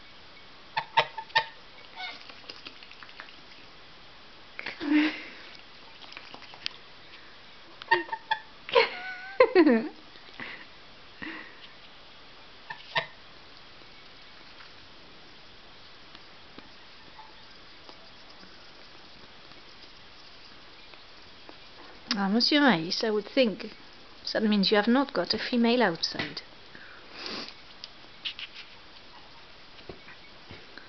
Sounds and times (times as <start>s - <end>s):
Honk: 0.8s - 2.2s, 12.7s - 13.2s.